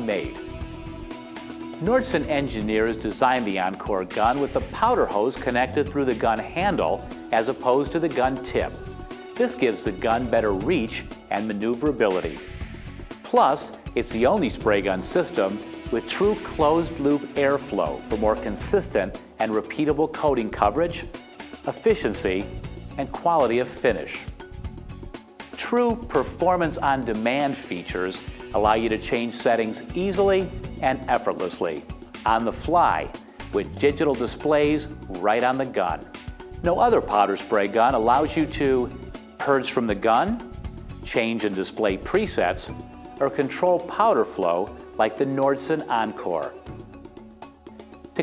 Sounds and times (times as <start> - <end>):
Speech: 0.0 - 0.4, 1.8 - 8.8, 9.4 - 12.4, 13.3 - 21.1, 21.7 - 24.3, 25.6 - 40.4, 41.1 - 46.6
Music: 0.0 - 48.2.